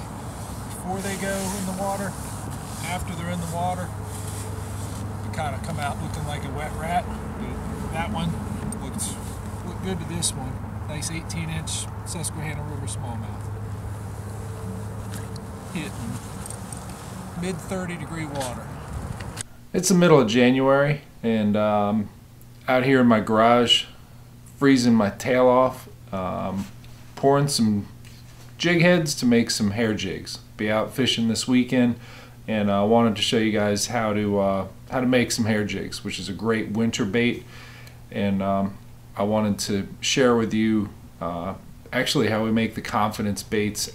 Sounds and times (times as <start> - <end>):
Speech: 0.8 - 2.2, 2.8 - 4.0, 5.2 - 13.4, 15.8 - 16.2, 17.4 - 18.7, 19.8 - 24.0, 24.6 - 28.0, 28.6 - 37.5, 38.1 - 43.9.